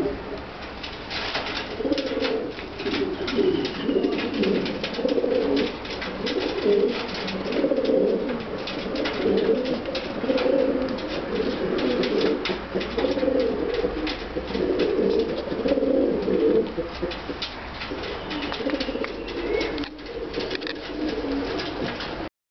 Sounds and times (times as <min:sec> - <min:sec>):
Pigeon, dove: 0:01.1 - 0:22.3.